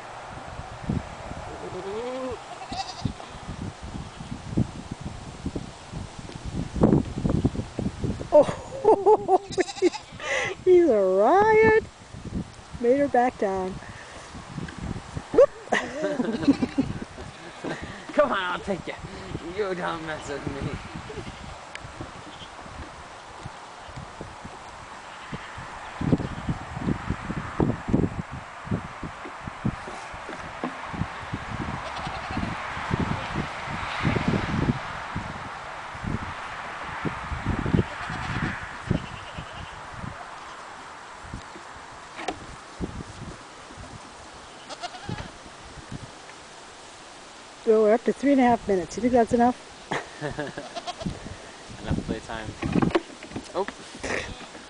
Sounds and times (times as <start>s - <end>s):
Rustling leaves: 0.0s - 54.7s
Livestock, farm animals, working animals: 1.4s - 4.3s, 9.4s - 10.2s, 16.3s - 18.2s, 21.1s - 26.5s, 31.8s - 32.6s, 37.6s - 40.8s, 44.4s - 45.4s, 50.5s - 51.2s, 52.6s - 54.7s.